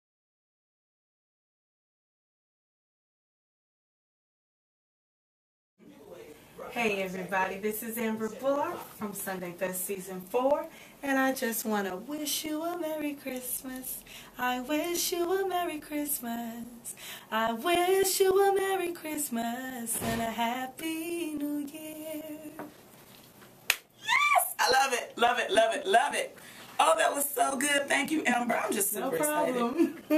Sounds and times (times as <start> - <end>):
Speech: 24.4 - 30.1.